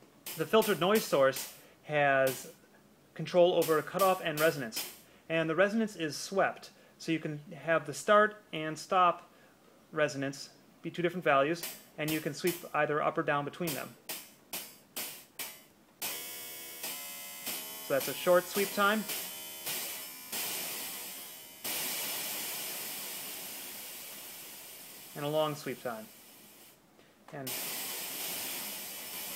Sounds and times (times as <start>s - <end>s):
Speech: 0.4s - 2.5s, 3.2s - 9.2s, 10.0s - 14.0s, 17.9s - 19.1s, 25.2s - 26.1s, 27.3s - 27.6s.